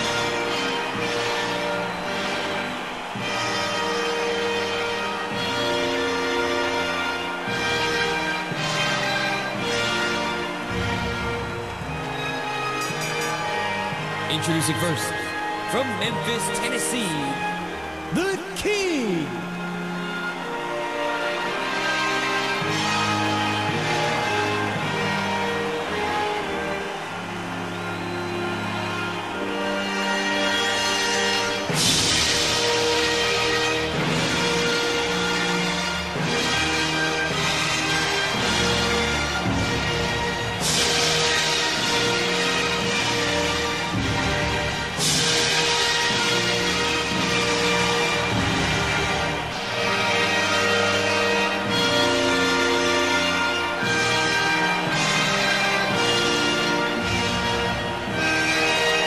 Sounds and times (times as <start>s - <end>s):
Music: 0.0s - 59.0s
Speech: 14.3s - 17.5s, 18.1s - 19.4s.